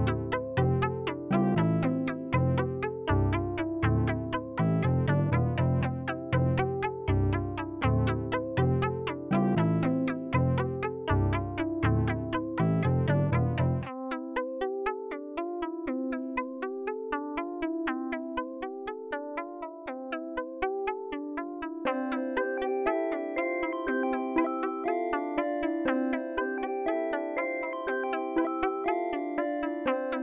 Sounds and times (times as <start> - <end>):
Synthesizer: 0.0 - 30.2.